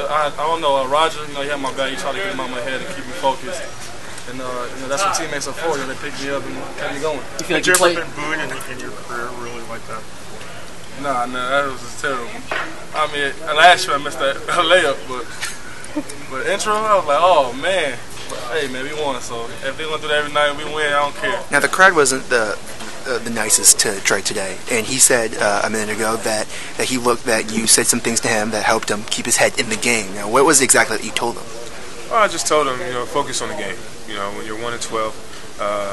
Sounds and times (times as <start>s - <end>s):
Crowd: 0.0s - 25.3s, 29.8s - 35.9s.